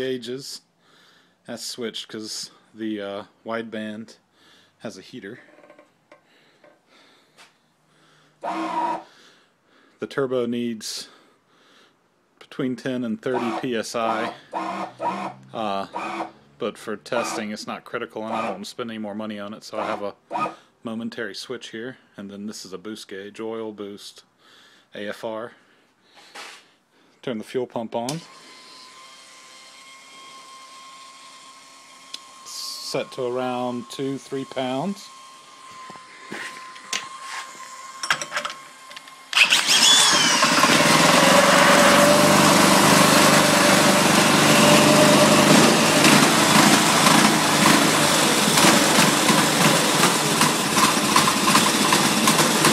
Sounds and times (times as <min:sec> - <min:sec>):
Power tool: 0:08.4 - 0:09.1, 0:13.3 - 0:16.6, 0:17.2 - 0:17.6, 0:18.3 - 0:18.6, 0:19.8 - 0:20.6, 0:28.1 - 0:52.7.